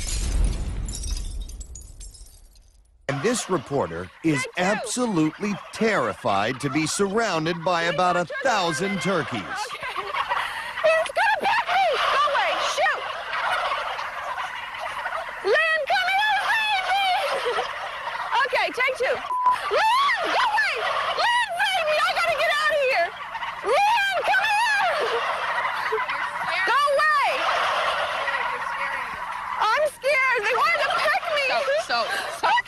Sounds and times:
Gobble: 3.1 - 32.6.

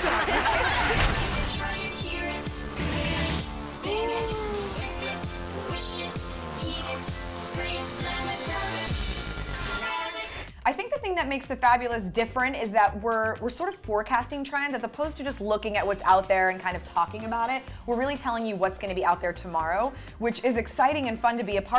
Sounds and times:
Music: 0.0 - 21.7
Speech: 10.7 - 21.7.

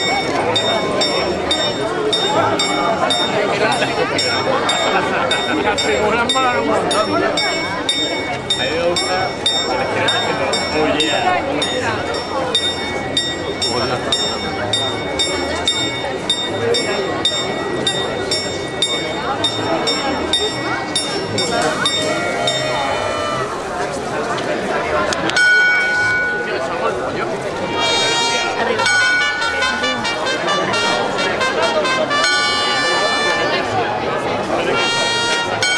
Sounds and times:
Speech: 0.0 - 35.7.

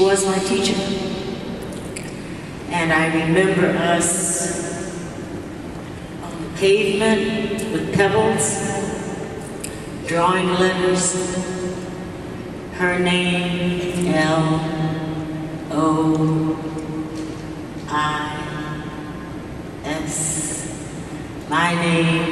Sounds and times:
Female speech, woman speaking: 0.0 - 1.3, 2.7 - 4.9, 6.2 - 9.1, 10.0 - 11.6, 12.8 - 16.8, 17.9 - 18.9, 19.8 - 20.8, 21.5 - 22.3
Narration, monologue: 0.0 - 22.3.

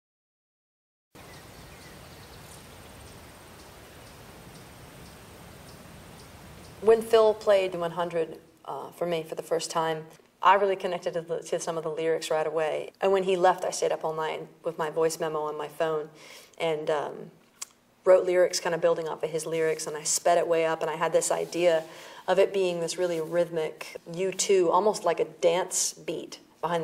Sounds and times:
Speech: 6.8 - 17.4, 18.0 - 26.8.

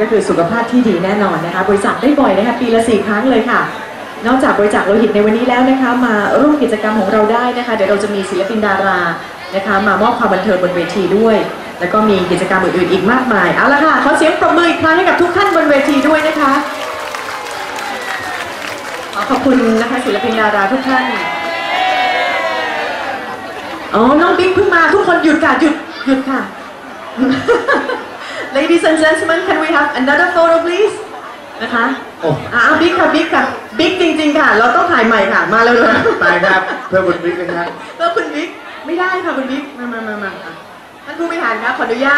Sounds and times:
Female speech, woman speaking: 0.0 - 16.9, 19.2 - 21.4, 23.9 - 26.6, 28.5 - 42.1
Crowd: 0.0 - 42.1.

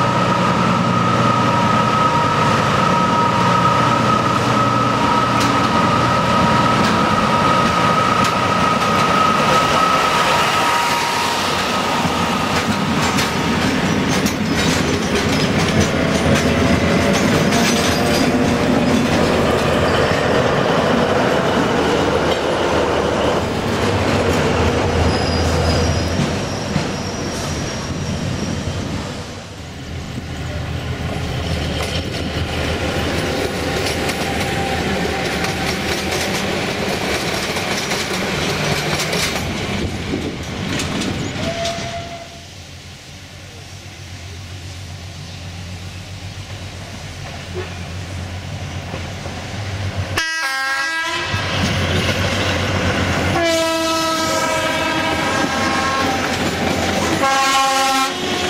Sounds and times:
Train horn: 0.0 - 11.9, 41.4 - 42.5, 50.2 - 51.5, 53.3 - 58.4
Railroad car, train wagon: 0.0 - 58.4
Clickety-clack: 7.6 - 9.6, 12.0 - 19.8, 33.1 - 41.9.

